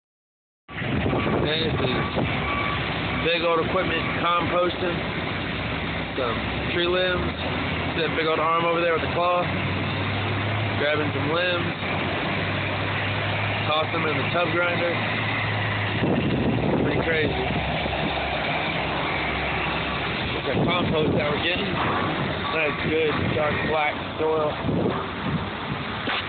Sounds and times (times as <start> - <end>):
Vehicle: 0.7 - 26.2
Speech: 1.4 - 2.1, 3.2 - 5.0, 6.2 - 7.3, 8.0 - 9.5, 10.8 - 11.8, 13.6 - 15.0, 16.8 - 17.6, 20.4 - 21.8, 22.5 - 24.6.